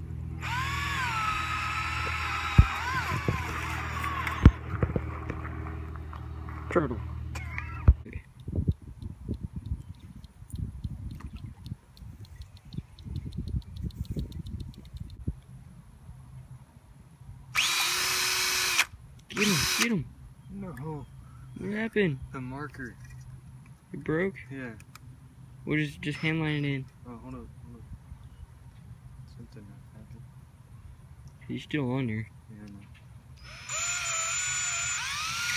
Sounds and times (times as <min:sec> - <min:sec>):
Power tool: 0:00.4 - 0:04.6, 0:17.6 - 0:19.9, 0:33.4 - 0:35.5.